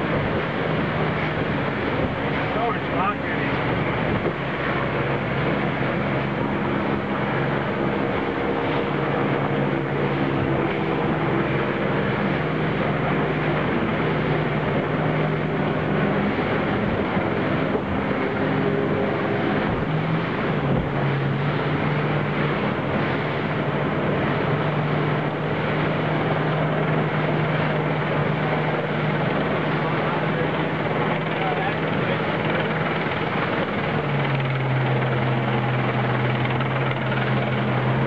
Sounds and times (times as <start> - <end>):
Motorboat, speedboat: 0.0 - 38.0.